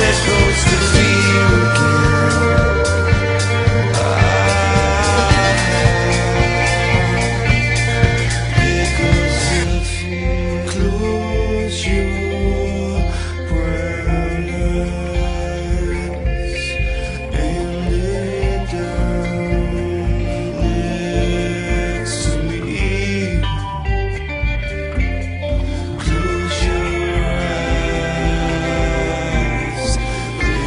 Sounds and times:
Singing: 0.0s - 23.7s, 25.9s - 30.6s.

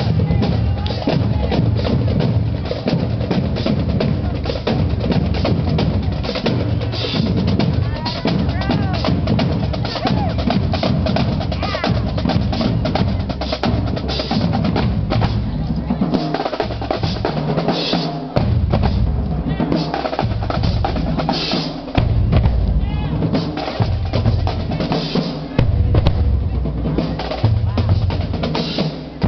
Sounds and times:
Speech: 0.0s - 2.0s, 4.0s - 4.9s, 5.9s - 10.5s, 11.5s - 13.6s, 15.2s - 16.5s, 19.4s - 19.9s, 22.8s - 23.3s, 23.9s - 29.2s
Music: 0.0s - 29.2s.

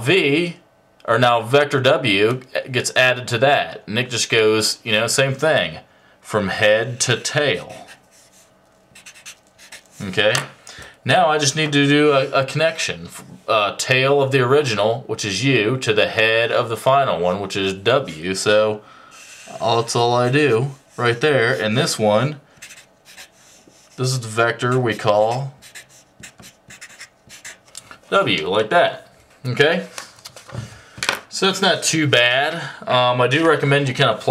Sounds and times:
Speech: 0.0s - 8.0s, 10.0s - 18.8s, 19.5s - 22.4s, 24.0s - 25.6s, 28.1s - 30.0s, 31.3s - 34.3s.

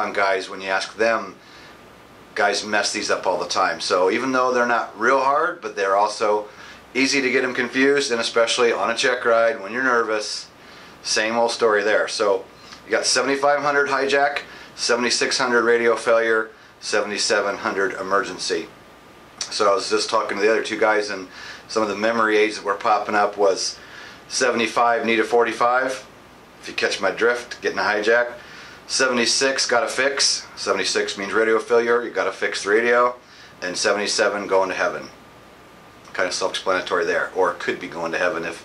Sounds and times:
Speech: 0.0s - 1.4s, 2.4s - 18.8s, 19.4s - 35.2s, 36.1s - 38.6s.

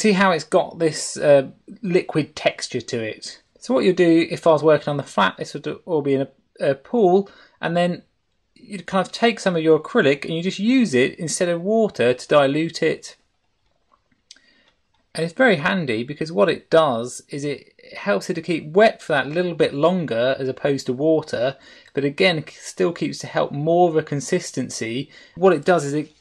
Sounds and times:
Speech: 0.0s - 13.2s, 15.2s - 26.2s.

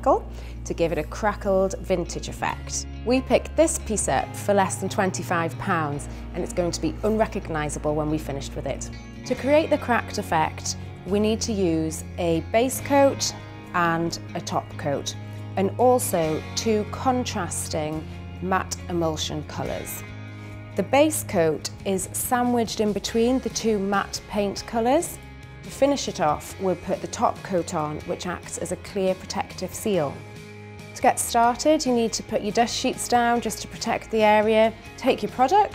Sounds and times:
Speech: 0.0s - 20.0s, 20.8s - 30.2s, 31.0s - 35.7s
Music: 0.0s - 35.7s.

